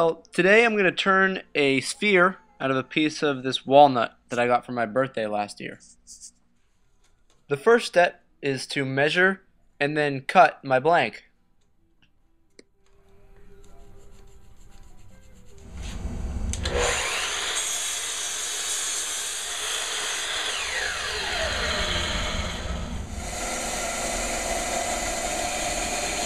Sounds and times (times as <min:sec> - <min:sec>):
Speech: 0:00.0 - 0:05.9, 0:07.5 - 0:11.2
Power tool: 0:15.7 - 0:26.2.